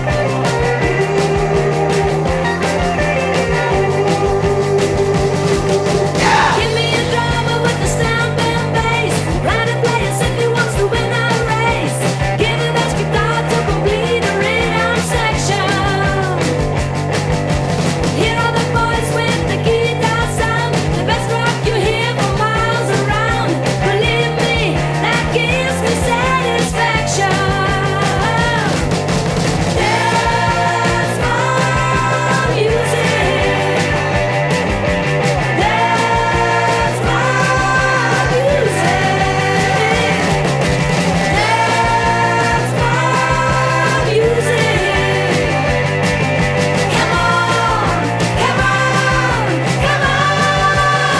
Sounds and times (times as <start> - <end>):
Pop music: 0.0 - 51.1.